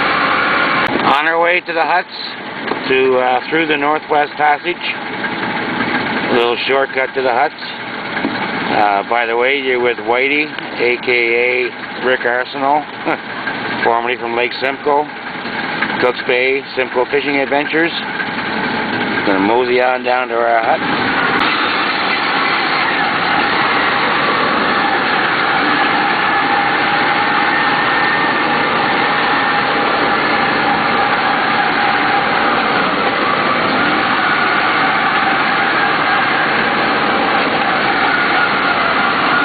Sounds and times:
Outside, rural or natural: 0.0 - 39.4
Vehicle: 0.0 - 39.4
Speech: 1.0 - 5.0, 6.3 - 7.8, 8.7 - 13.2, 13.8 - 15.1, 16.0 - 18.1, 19.3 - 20.8.

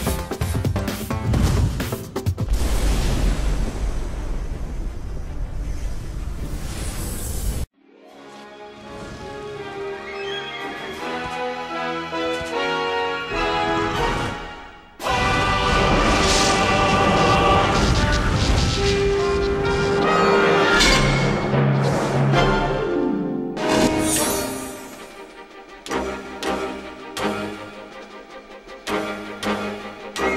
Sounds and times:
Music: 0.0 - 2.6, 7.7 - 30.3.

